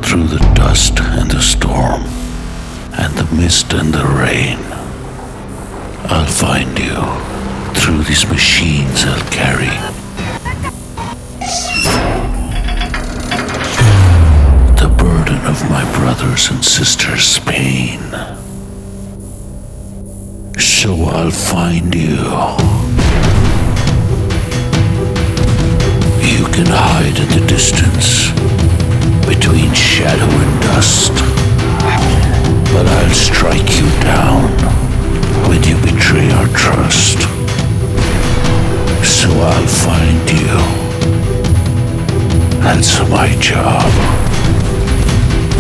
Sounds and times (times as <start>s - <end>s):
Speech: 0.0s - 2.1s, 3.0s - 4.9s, 6.1s - 10.0s, 14.8s - 18.4s, 20.6s - 22.9s, 26.2s - 28.4s, 29.3s - 34.8s, 35.4s - 37.4s, 39.0s - 40.9s, 42.6s - 44.2s
Music: 0.0s - 45.6s.